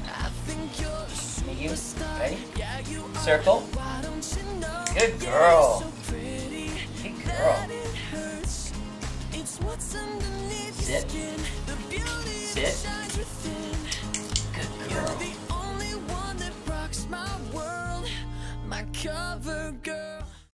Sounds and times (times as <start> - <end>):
Music: 0.0 - 20.5
Speech: 1.4 - 2.4, 3.1 - 3.7, 4.9 - 5.9, 10.8 - 11.2, 12.6 - 12.9.